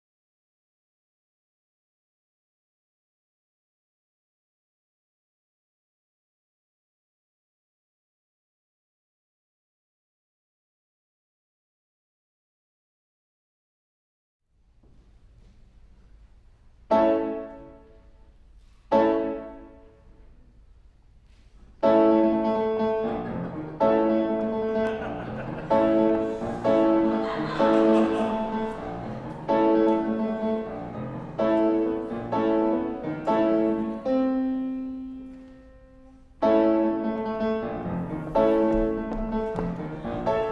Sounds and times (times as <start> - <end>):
Classical music: 15.3 - 40.5
Independent music: 21.8 - 40.5.